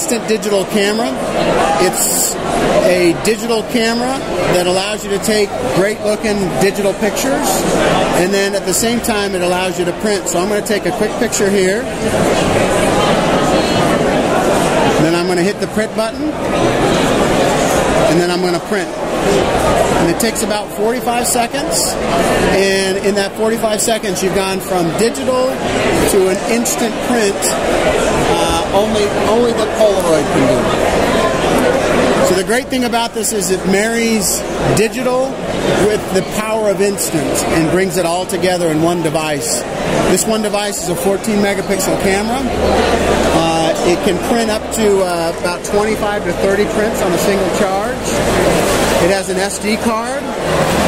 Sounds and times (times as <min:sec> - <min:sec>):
Speech: 0:00.0 - 0:16.5, 0:17.9 - 0:50.4.